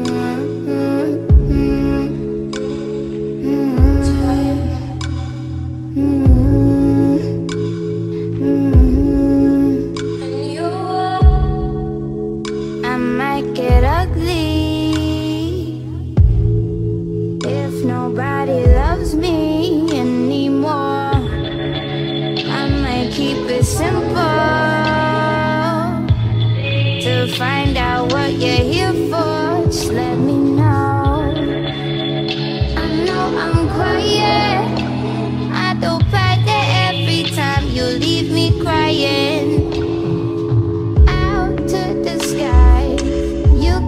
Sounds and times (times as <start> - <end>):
Music: 0.0 - 43.8.